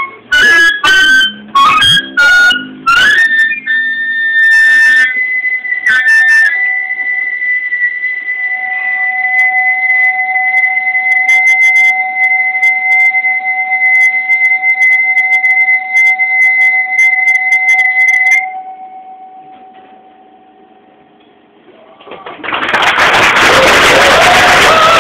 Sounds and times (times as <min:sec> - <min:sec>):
Whistle: 0:00.0 - 0:19.8, 0:23.2 - 0:25.0
Music: 0:00.0 - 0:21.2, 0:23.5 - 0:25.0.